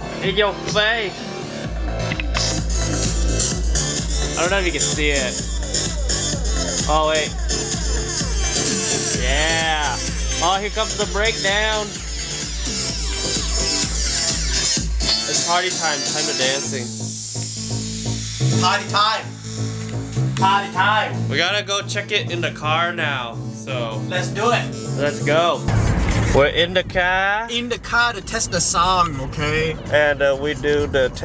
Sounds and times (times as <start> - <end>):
Speech: 0.2 - 1.2, 4.4 - 5.4, 6.8 - 7.4, 9.2 - 11.9, 15.3 - 16.9, 18.6 - 19.3, 20.4 - 25.6, 26.3 - 31.2
Musical instrument: 1.0 - 21.3.